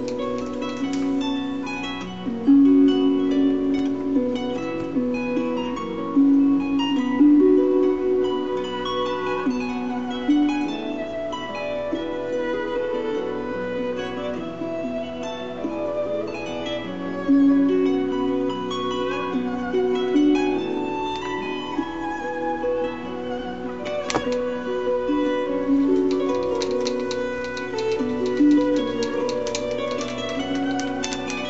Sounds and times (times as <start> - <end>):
Violin, fiddle: 0.0 - 31.5.